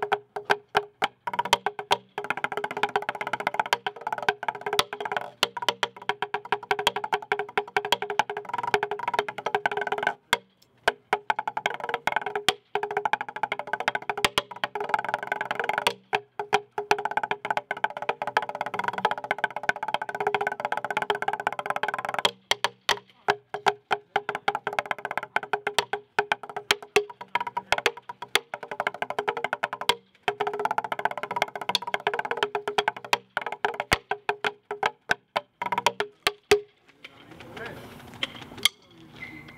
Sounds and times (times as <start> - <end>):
Wood block: 0.0 - 36.8, 38.3 - 39.0.